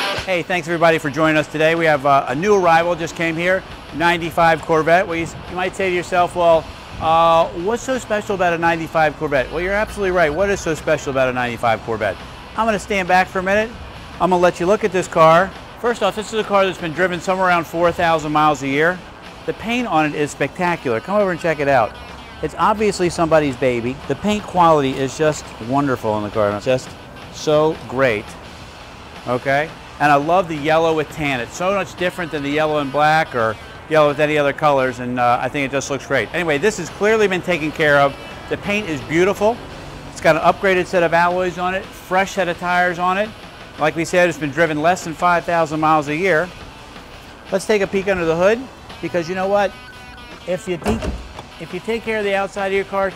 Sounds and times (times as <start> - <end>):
Music: 0.0 - 53.1
Speech: 0.3 - 28.3, 29.3 - 39.6, 40.2 - 46.5, 47.5 - 49.7, 50.4 - 53.1.